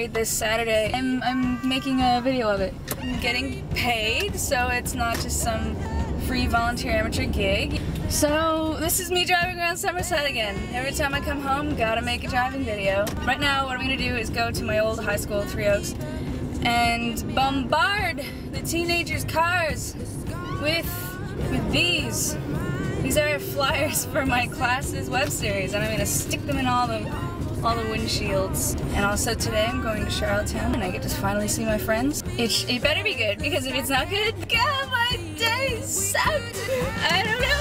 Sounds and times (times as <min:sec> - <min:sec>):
Speech: 0:00.0 - 0:15.9, 0:23.1 - 0:36.4
Car: 0:00.0 - 0:37.6
Music: 0:00.0 - 0:37.6.